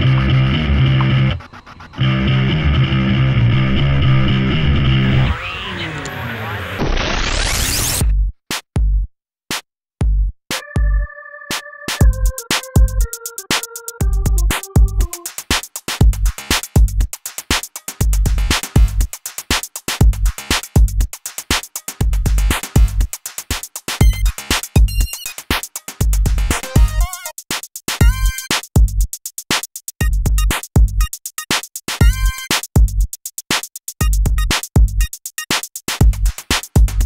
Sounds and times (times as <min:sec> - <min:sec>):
Drum machine: 0:00.0 - 0:02.3, 0:08.0 - 0:37.0.